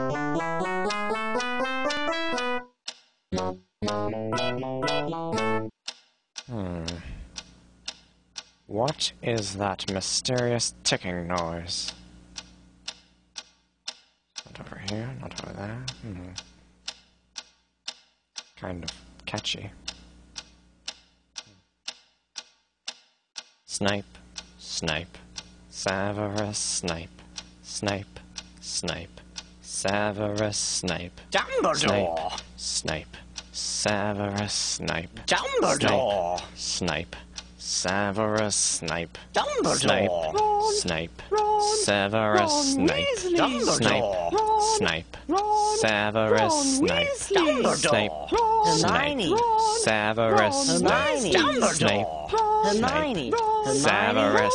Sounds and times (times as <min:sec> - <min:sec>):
Speech: 0:08.7 - 0:12.0, 0:14.5 - 0:16.4, 0:18.6 - 0:19.8, 0:23.7 - 0:25.2, 0:25.8 - 0:27.1, 0:27.7 - 0:54.5.